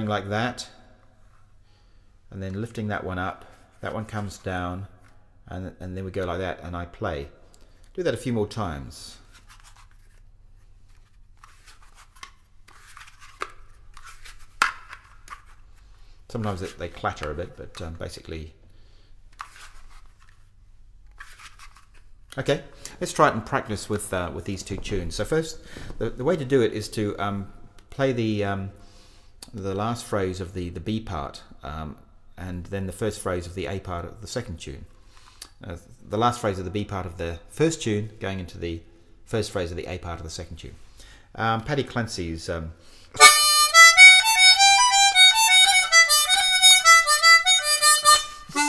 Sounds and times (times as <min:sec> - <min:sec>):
Speech: 0:00.0 - 0:00.8, 0:02.3 - 0:04.9, 0:05.5 - 0:07.4, 0:08.0 - 0:09.3, 0:16.3 - 0:18.6, 0:22.4 - 0:28.8, 0:29.5 - 0:34.9, 0:35.6 - 0:40.8, 0:41.4 - 0:42.8.